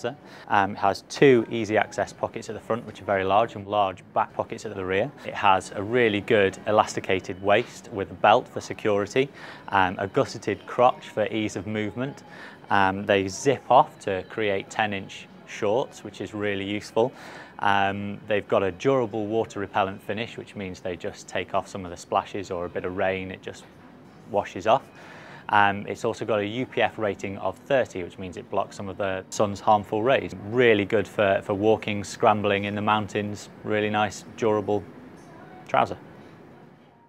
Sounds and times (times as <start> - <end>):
Speech: 0.0 - 23.7, 24.3 - 24.9, 25.5 - 36.0.